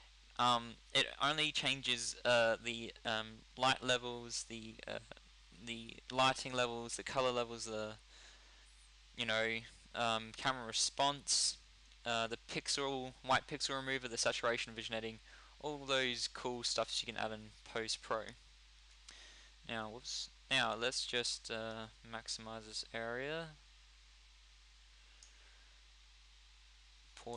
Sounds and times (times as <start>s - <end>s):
Speech: 0.4s - 8.0s, 9.2s - 18.4s, 19.7s - 23.6s.